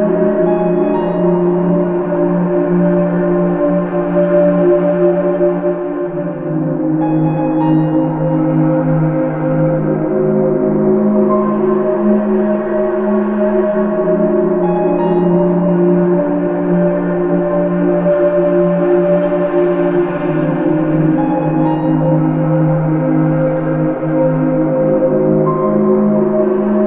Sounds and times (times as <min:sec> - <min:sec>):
Music: 0:00.0 - 0:26.8.